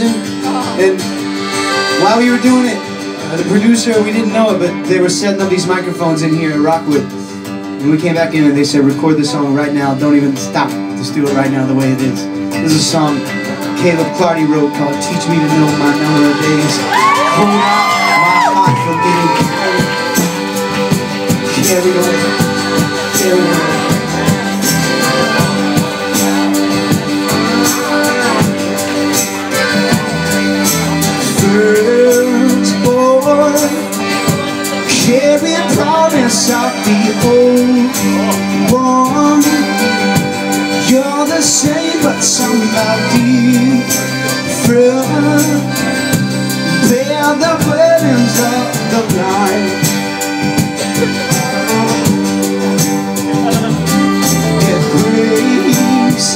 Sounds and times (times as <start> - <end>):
Speech: 0.0 - 1.0, 2.0 - 7.1, 7.8 - 16.8, 17.4 - 20.3
Music: 0.0 - 56.3.